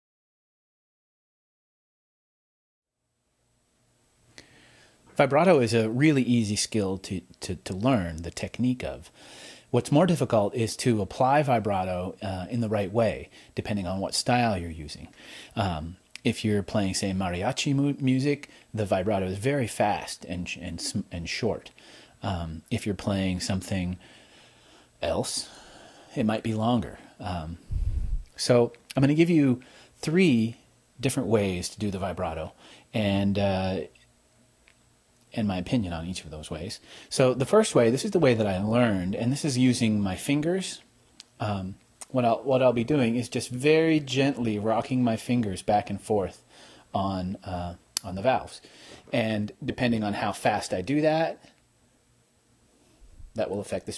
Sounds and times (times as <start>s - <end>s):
Speech: 5.2s - 9.1s, 9.7s - 24.0s, 25.0s - 27.6s, 28.4s - 34.0s, 35.3s - 51.6s, 53.4s - 53.9s.